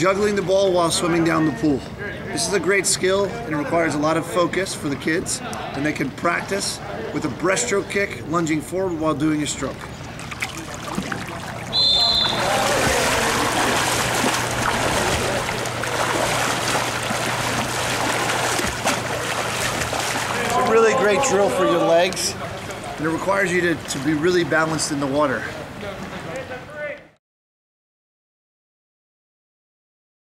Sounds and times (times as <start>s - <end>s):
Speech: 0.0s - 9.8s, 20.4s - 27.2s
Stream: 9.2s - 26.8s.